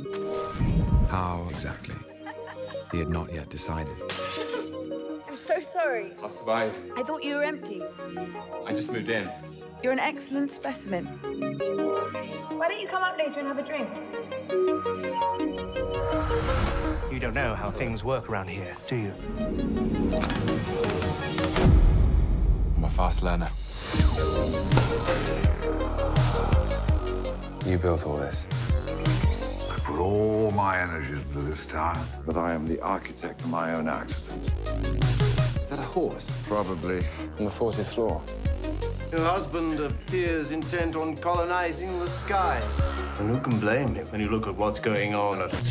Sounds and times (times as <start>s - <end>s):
Music: 0.0s - 45.7s.